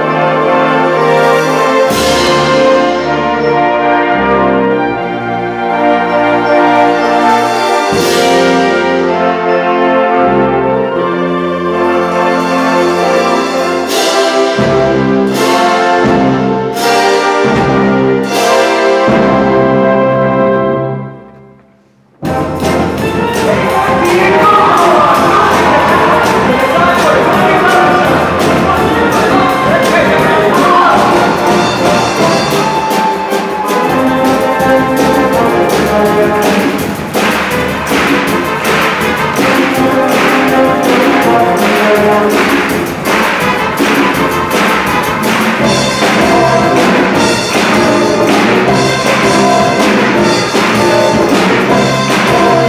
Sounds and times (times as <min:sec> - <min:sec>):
Music: 0:00.0 - 0:52.6
Speech: 0:23.4 - 0:32.1.